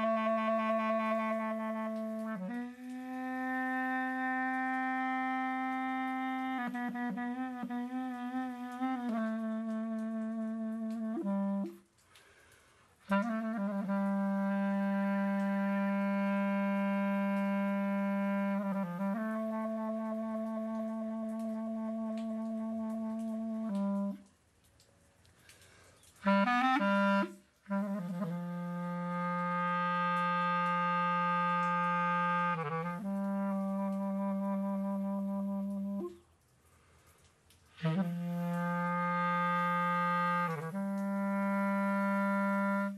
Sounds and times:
Music: 0.0 - 12.0, 13.0 - 24.3, 26.2 - 36.2, 37.8 - 42.9
Inside, small room: 0.0 - 42.9.

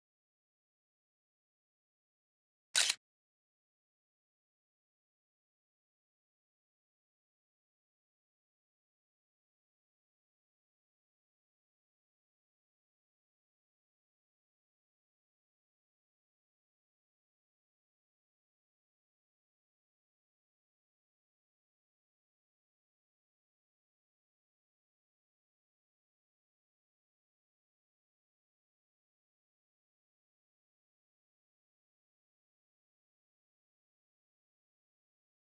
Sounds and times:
Single-lens reflex camera: 2.8 - 3.0.

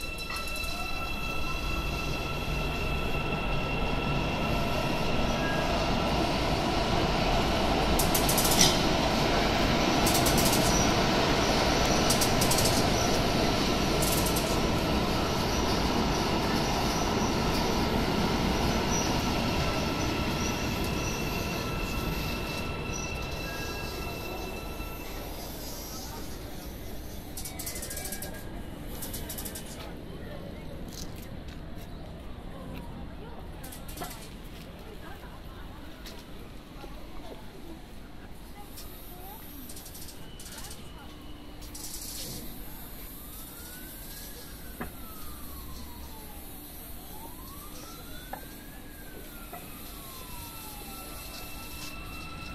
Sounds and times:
Train: 0.0 - 52.5.

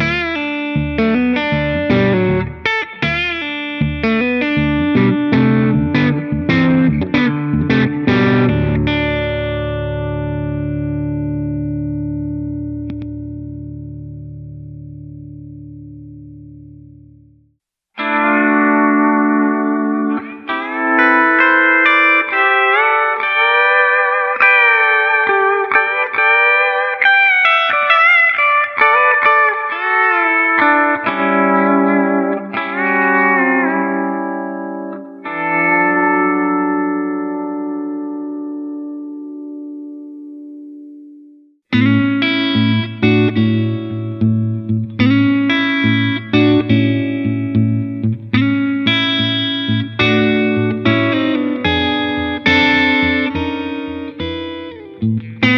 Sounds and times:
Distortion: 0.0 - 55.5
Effects unit: 0.0 - 55.5
Guitar: 0.0 - 55.5.

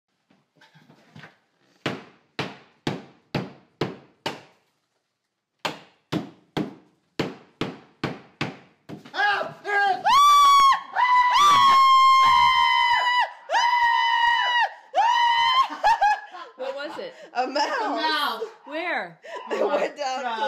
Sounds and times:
Speech: 16.6 - 20.4.

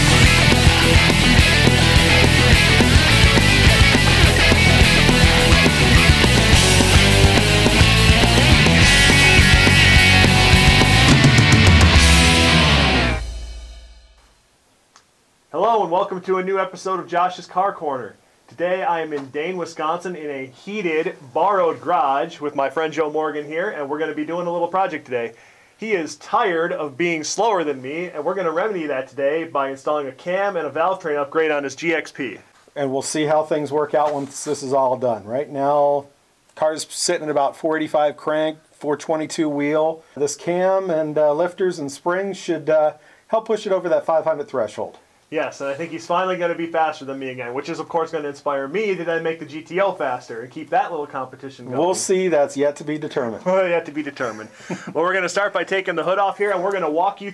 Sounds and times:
Speech: 15.5 - 57.3.

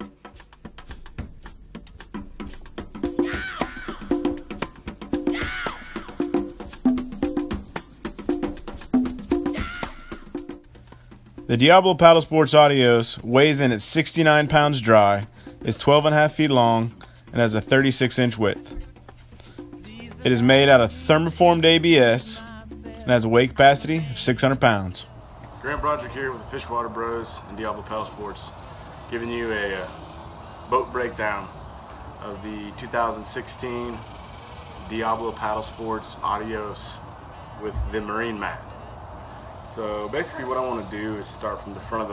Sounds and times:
Music: 0.0 - 34.0, 34.9 - 42.1
Speech: 11.5 - 18.6, 20.1 - 28.5, 29.1 - 30.0, 30.7 - 31.5, 32.2 - 34.0, 34.9 - 37.0, 37.6 - 38.7, 39.7 - 42.1.

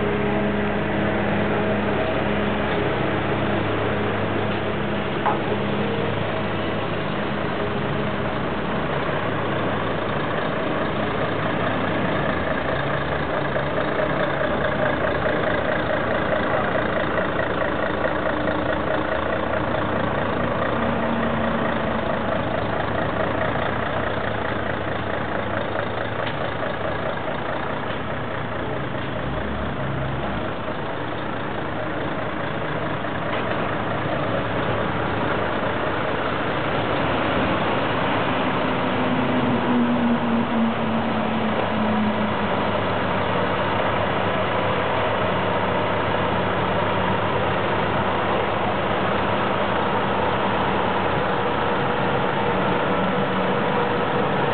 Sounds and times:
Vehicle: 0.0 - 54.5.

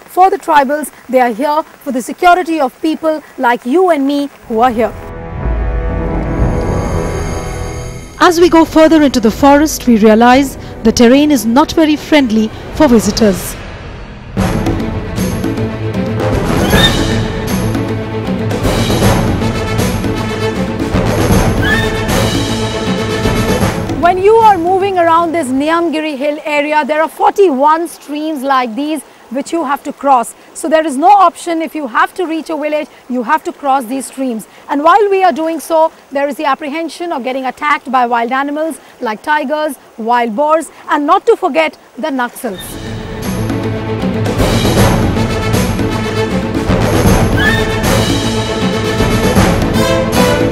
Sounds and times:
Outside, rural or natural: 0.0 - 50.5
Speech: 0.1 - 4.9, 8.2 - 13.6, 24.0 - 42.8
Music: 4.5 - 26.0, 42.6 - 50.5.

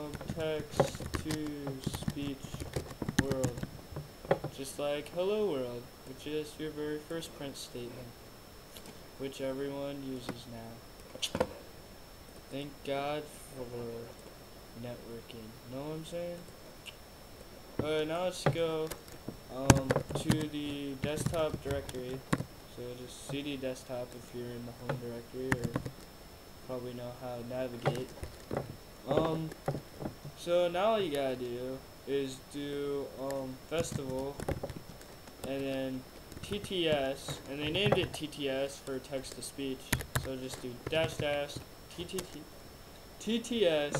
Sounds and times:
Speech: 0.0 - 3.7, 4.5 - 8.2, 9.2 - 11.4, 12.5 - 14.1, 14.8 - 16.5, 17.8 - 25.8, 26.7 - 28.1, 29.0 - 29.6, 30.4 - 34.4, 35.4 - 42.5, 43.2 - 43.9.

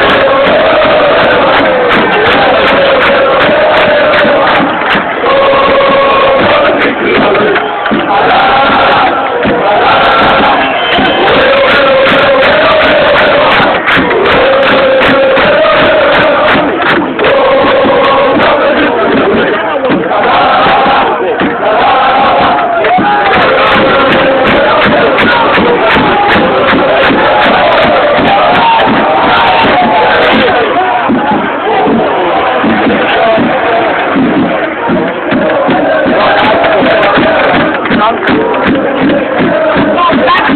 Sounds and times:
Music: 0.0 - 40.5.

